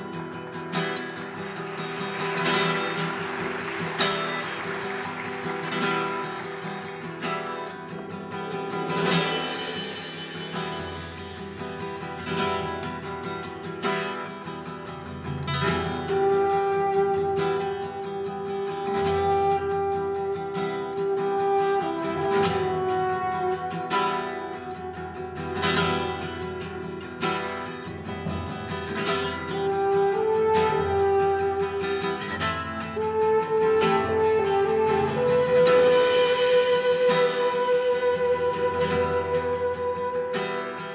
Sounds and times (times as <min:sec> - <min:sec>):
Acoustic guitar: 0:00.0 - 0:40.9
Strum: 0:00.0 - 0:40.9.